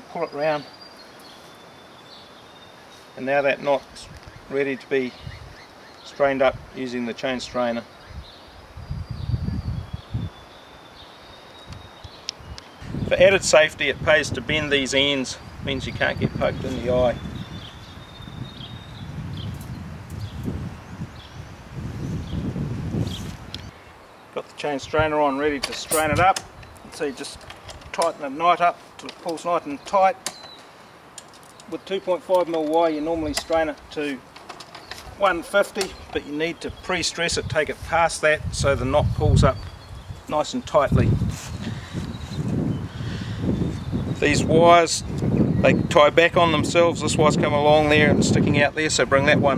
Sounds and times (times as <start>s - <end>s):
Speech: 0.0s - 0.7s, 3.2s - 5.2s, 6.1s - 7.9s, 13.1s - 17.2s, 24.4s - 30.2s, 31.7s - 34.2s, 35.2s - 39.6s, 40.3s - 41.2s, 44.2s - 49.5s.